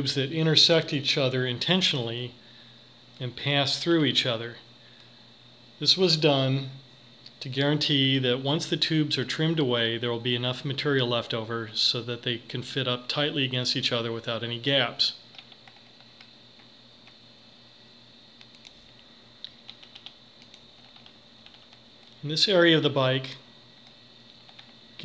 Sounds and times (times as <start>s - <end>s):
Speech: 0.0s - 2.4s, 3.2s - 4.7s, 5.8s - 15.2s, 22.2s - 23.5s.